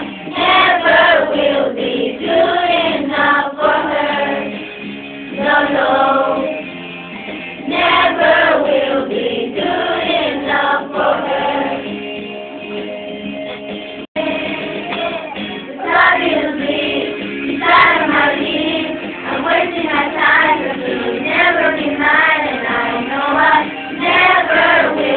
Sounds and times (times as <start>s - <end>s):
Music: 0.0s - 25.1s
Child singing: 14.2s - 25.1s.